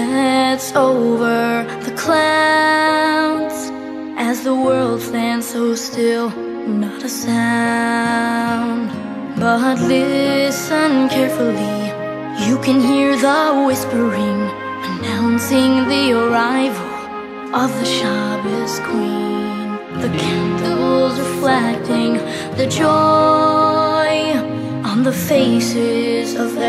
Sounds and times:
Music: 0.0s - 26.6s.

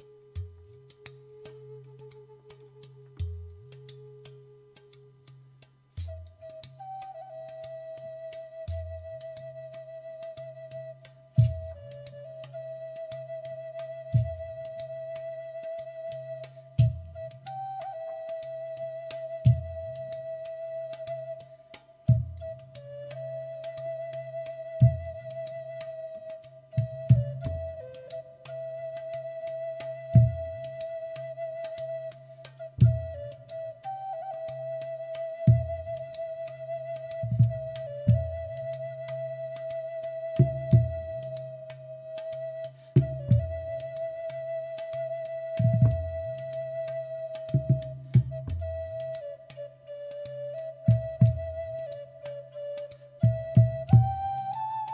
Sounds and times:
Flute: 0.0s - 54.9s.

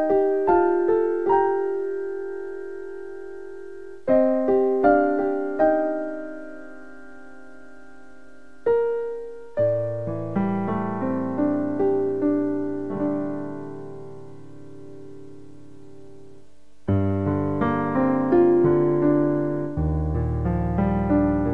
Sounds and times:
Music: 0.0s - 21.5s.

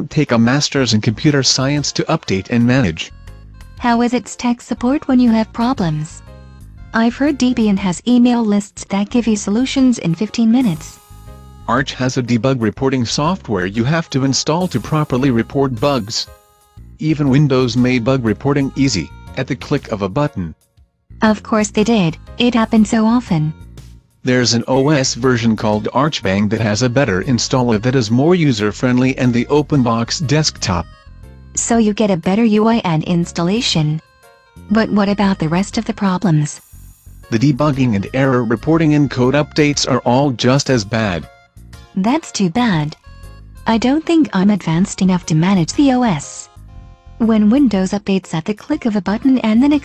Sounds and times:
Speech: 0.0s - 3.1s, 3.8s - 6.2s, 7.0s - 11.0s, 11.7s - 16.3s, 17.0s - 20.6s, 21.2s - 23.6s, 24.3s - 30.9s, 31.6s - 34.0s, 34.7s - 36.6s, 37.3s - 41.3s, 42.0s - 43.0s, 43.7s - 46.5s, 47.2s - 49.8s
Music: 0.0s - 49.8s.

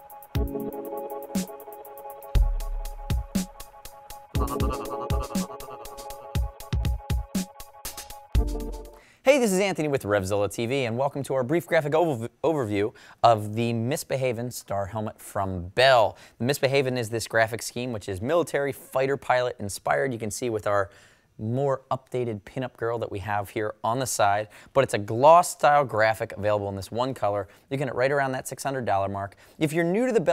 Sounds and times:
Music: 0.0s - 9.0s
Speech: 9.3s - 30.3s.

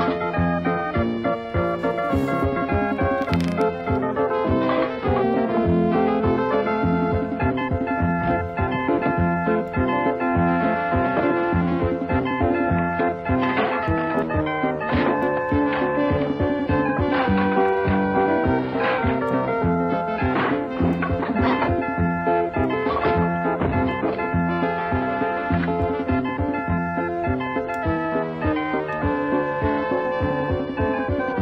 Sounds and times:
Music: 0.0s - 31.4s.

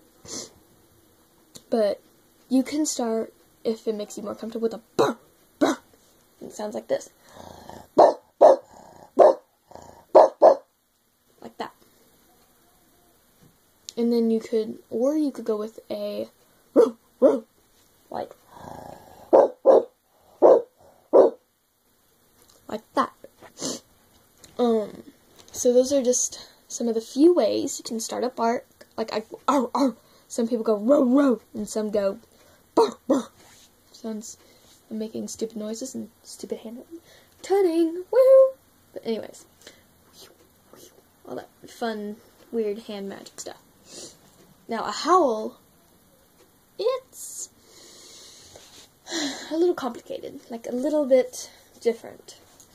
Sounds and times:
Speech: 1.6s - 5.8s, 6.4s - 7.2s, 11.4s - 11.8s, 13.9s - 16.4s, 18.1s - 18.4s, 22.7s - 23.3s, 24.6s - 32.2s, 32.8s - 39.5s, 41.2s - 43.6s, 44.7s - 45.6s, 46.8s - 47.5s, 49.4s - 52.5s
Bark: 8.0s - 9.5s, 10.1s - 10.7s, 16.8s - 17.5s, 19.3s - 21.4s.

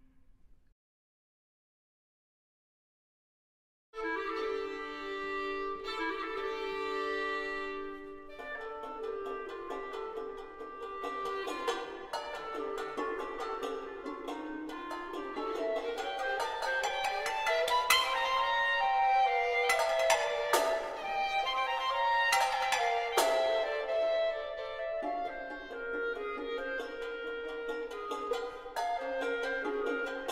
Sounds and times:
Violin, fiddle: 4.0s - 30.3s.

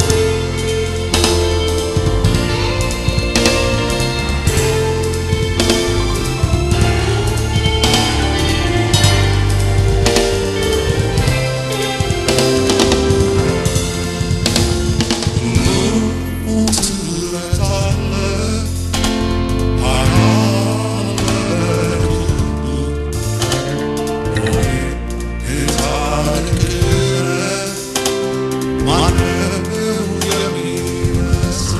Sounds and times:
Gospel music: 0.0s - 31.7s
Musical instrument: 0.0s - 31.7s
Singing: 15.4s - 19.1s, 19.8s - 31.7s.

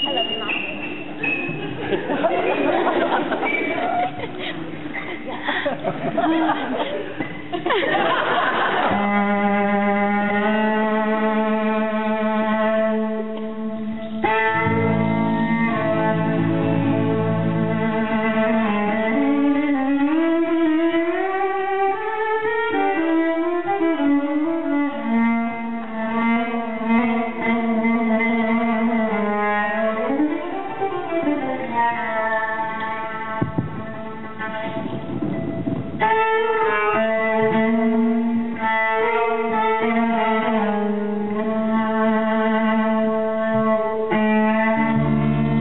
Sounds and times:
Violin, fiddle: 8.6s - 45.6s.

